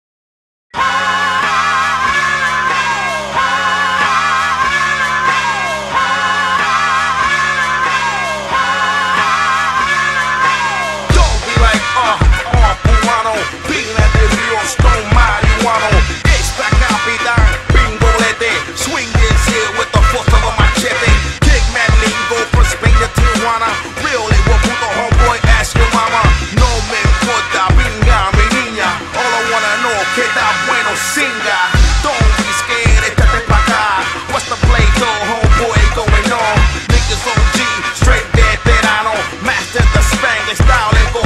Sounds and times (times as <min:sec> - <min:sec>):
Music: 0:00.7 - 0:41.2.